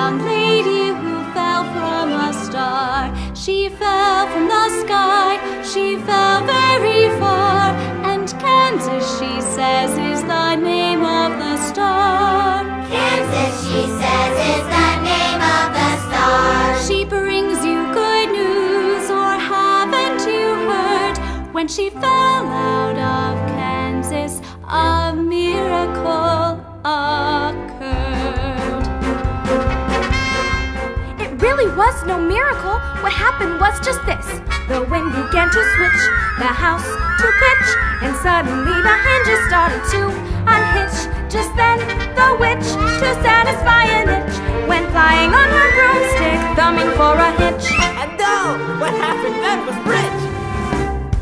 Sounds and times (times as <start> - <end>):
Music: 0.0 - 51.2
Singing: 34.3 - 48.1.